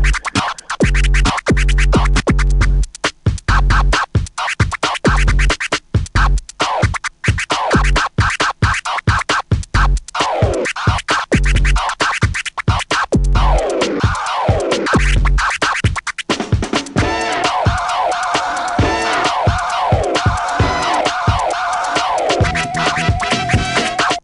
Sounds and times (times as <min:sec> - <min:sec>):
Hip hop music: 0:00.0 - 0:02.8, 0:10.1 - 0:16.0, 0:16.8 - 0:24.2
Scratching (performance technique): 0:00.0 - 0:24.2.